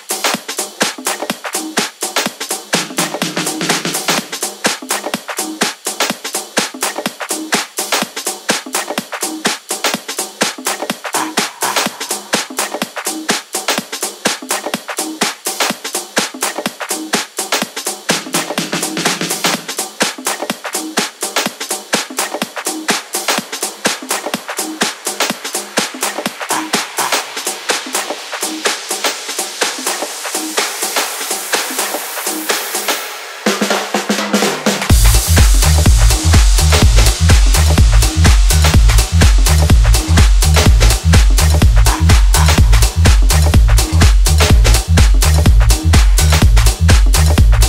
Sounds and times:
Music: 0.0s - 47.6s.

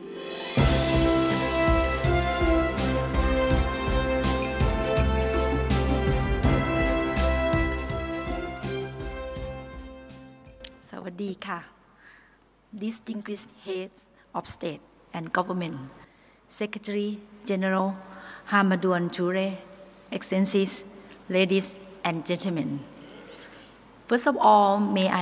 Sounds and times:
Music: 0.0s - 11.0s
Narration, monologue: 10.2s - 25.2s
Female speech, woman speaking: 10.8s - 11.7s, 12.8s - 22.9s, 24.1s - 25.2s.

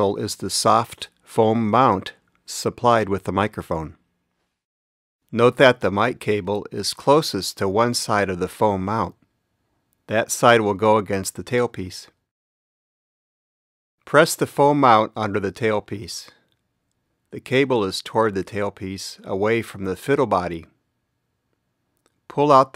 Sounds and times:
Speech: 0.0s - 4.0s, 5.3s - 9.2s, 10.1s - 12.2s, 14.1s - 16.4s, 17.3s - 20.8s, 22.3s - 22.7s.

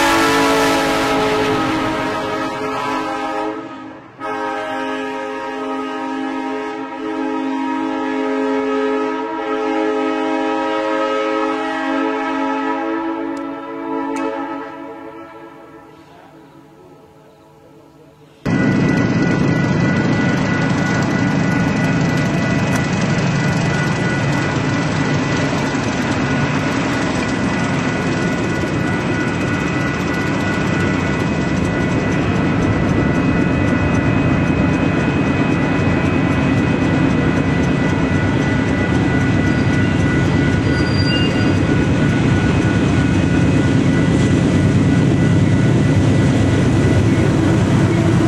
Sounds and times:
Vehicle horn, car horn, honking: 0.0s - 17.2s
Train whistle: 0.0s - 18.6s, 37.6s - 44.4s, 46.2s - 48.2s.

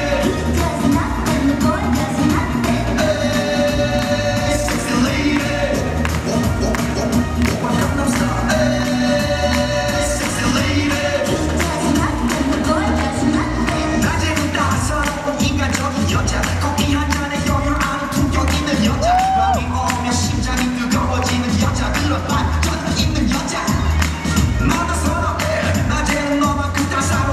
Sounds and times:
Music: 0.0s - 27.3s.

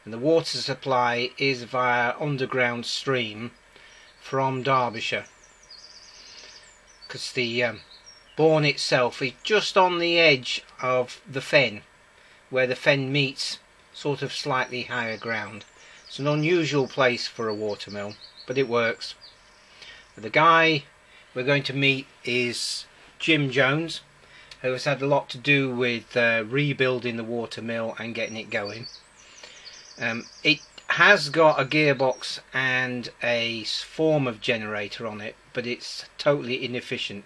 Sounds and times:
Speech: 0.0s - 3.6s, 4.2s - 5.3s, 7.1s - 7.8s, 8.4s - 11.8s, 12.6s - 19.2s, 20.2s - 24.0s, 24.6s - 28.9s, 30.0s - 37.2s.

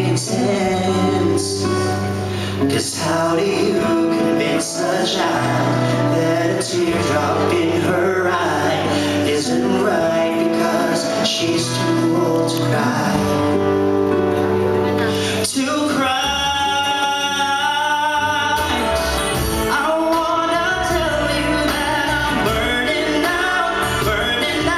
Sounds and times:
Male singing: 0.0s - 13.7s, 15.4s - 24.7s
Music: 0.0s - 24.7s.

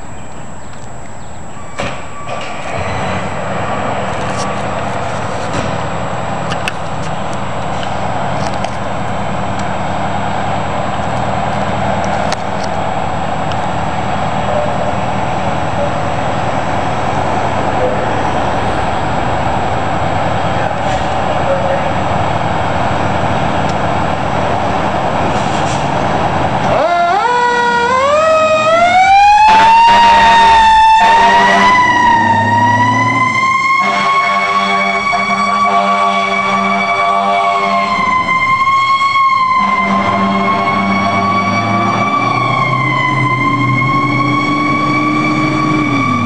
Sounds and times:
Heavy engine (low frequency): 0.0s - 46.2s
Vehicle: 0.0s - 46.2s.

